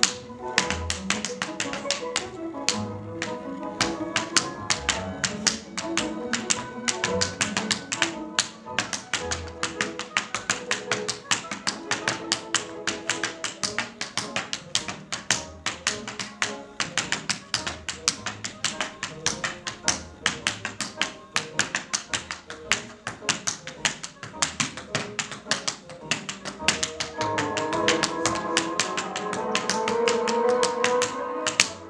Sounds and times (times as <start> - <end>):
Tap: 0.0 - 31.7
Music: 0.0 - 31.8.